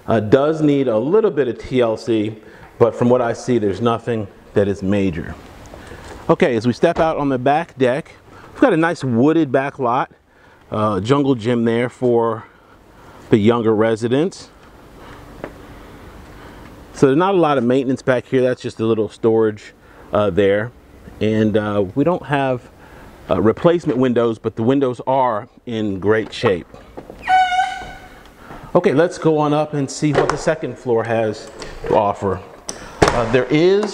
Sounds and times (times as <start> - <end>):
Speech: 0.1 - 5.4, 6.3 - 12.5, 13.3 - 14.6, 17.0 - 22.7, 23.3 - 26.7, 28.7 - 33.9.